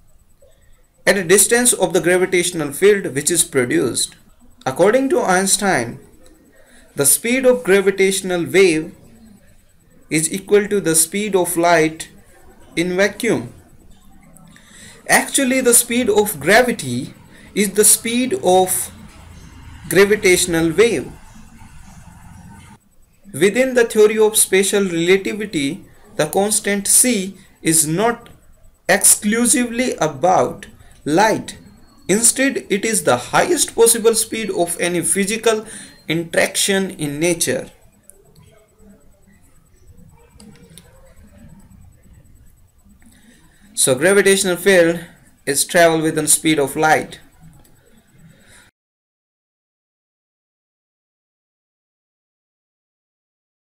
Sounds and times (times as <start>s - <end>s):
Speech: 1.0s - 47.6s.